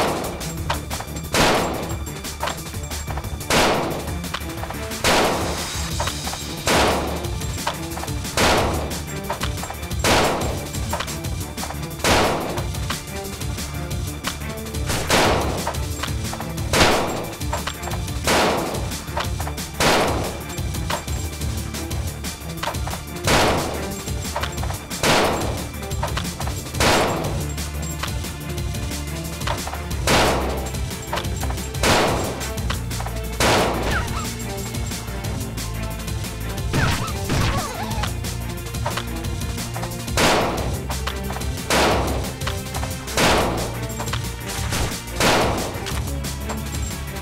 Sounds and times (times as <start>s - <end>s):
Music: 0.0s - 47.2s.